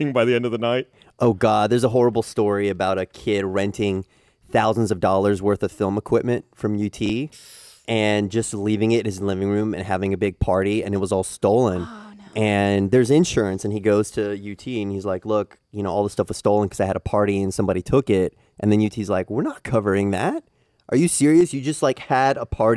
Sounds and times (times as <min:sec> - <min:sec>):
Speech: 0:00.0 - 0:07.3, 0:07.9 - 0:22.7.